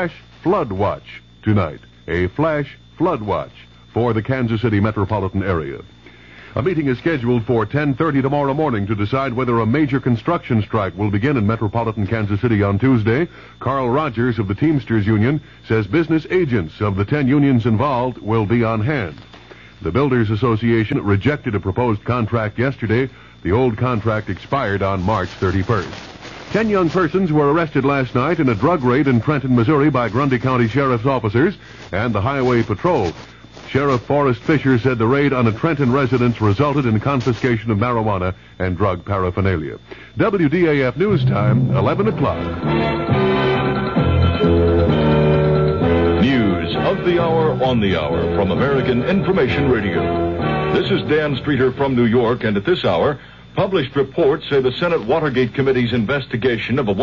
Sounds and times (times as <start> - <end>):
Speech: 0.0 - 6.0, 6.6 - 19.2, 19.8 - 42.6, 46.2 - 57.0
Radio: 0.0 - 43.3, 46.2 - 57.0.